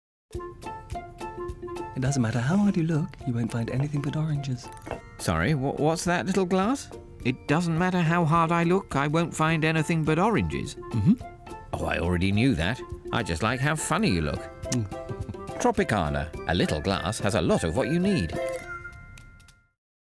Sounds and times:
Music: 0:00.3 - 0:19.8
Speech: 0:02.0 - 0:10.8, 0:15.6 - 0:18.4.

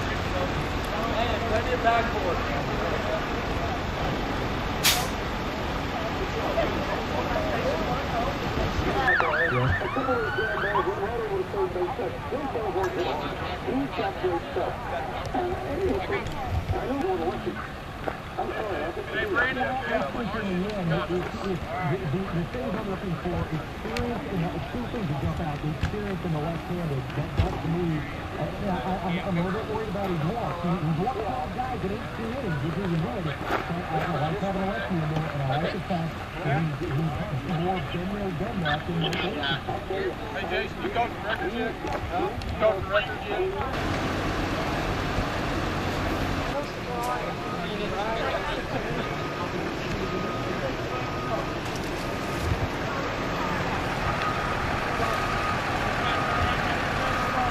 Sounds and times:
Speech: 0:00.0 - 0:04.2, 0:05.8 - 0:43.8, 0:46.5 - 0:51.6, 0:55.9 - 0:57.5.

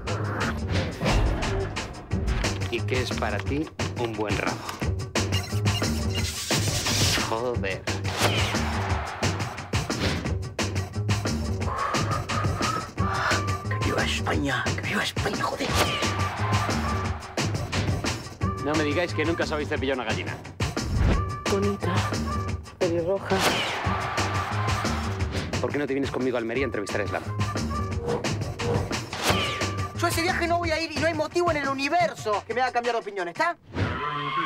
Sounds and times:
Music: 0:00.0 - 0:34.4.

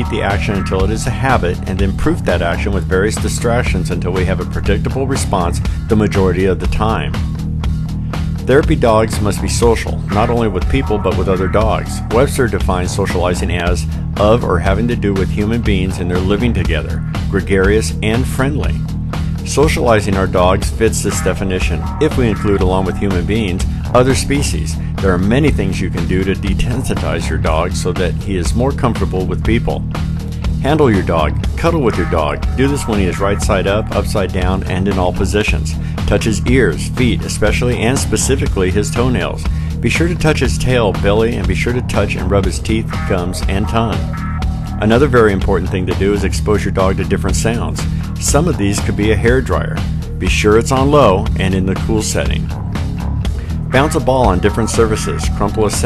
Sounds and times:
Speech: 0:00.0 - 0:07.2, 0:08.5 - 0:18.8, 0:19.4 - 0:29.9, 0:30.6 - 0:44.2, 0:44.8 - 0:52.6, 0:53.7 - 0:55.8
Music: 0:00.0 - 0:55.8.

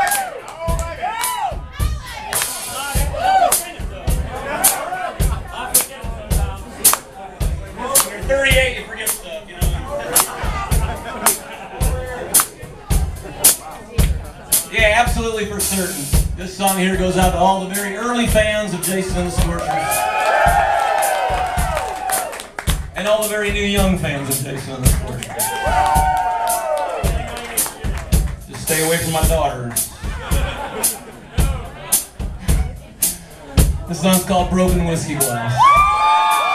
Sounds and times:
Music: 0:00.0 - 0:36.5
Speech: 0:05.6 - 0:19.9, 0:23.0 - 0:25.2, 0:28.5 - 0:29.8, 0:33.8 - 0:35.6.

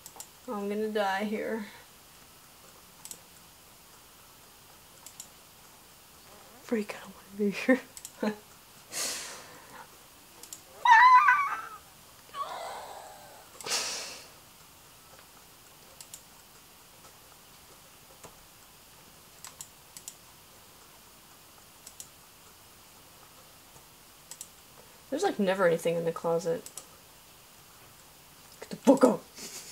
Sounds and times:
Inside, small room: 0:00.0 - 0:29.7.

